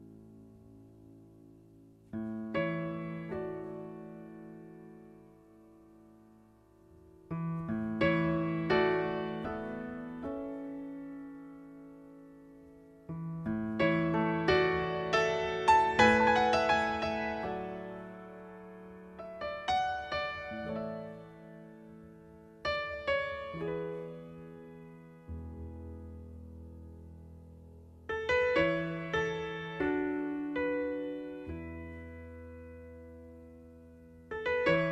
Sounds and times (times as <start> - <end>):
Music: 0.0 - 34.9.